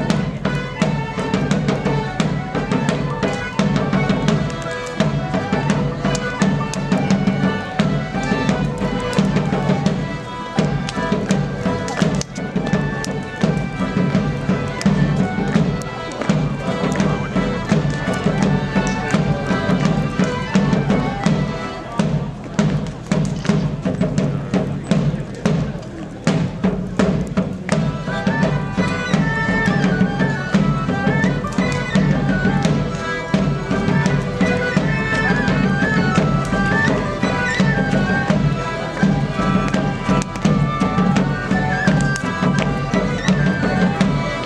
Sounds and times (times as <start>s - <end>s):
Fire: 0.0s - 44.4s
Traditional music: 0.0s - 44.4s
Speech: 10.8s - 13.4s, 14.8s - 31.2s.